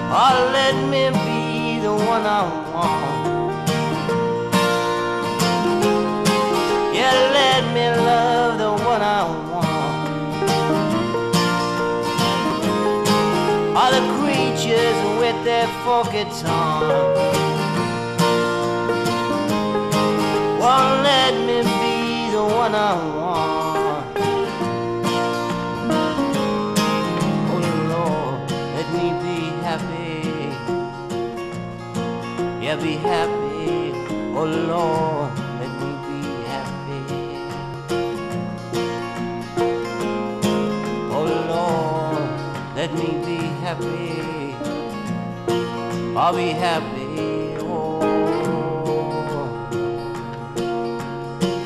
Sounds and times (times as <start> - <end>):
Music: 0.0 - 51.6.